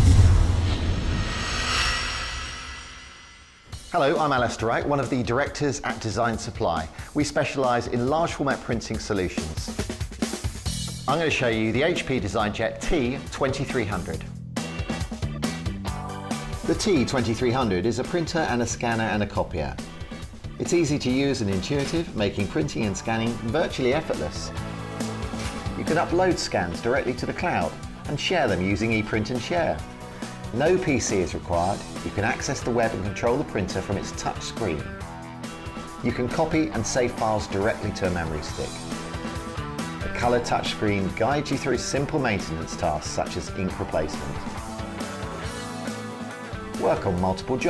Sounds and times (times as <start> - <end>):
Music: 0.0 - 47.7
Speech: 3.9 - 9.8, 11.1 - 14.3, 16.7 - 19.8, 20.6 - 24.5, 25.8 - 29.8, 30.5 - 34.9, 36.0 - 38.8, 40.1 - 44.6, 46.8 - 47.7.